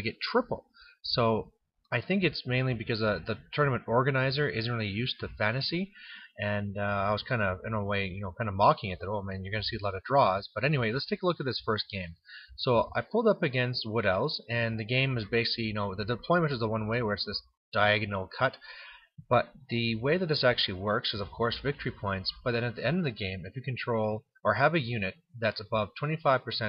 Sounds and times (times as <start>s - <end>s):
Speech: 0.0s - 26.6s.